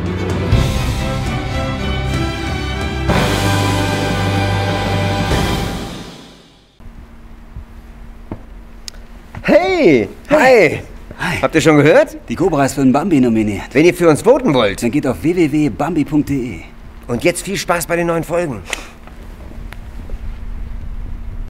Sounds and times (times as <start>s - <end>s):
Speech: 9.4s - 18.7s.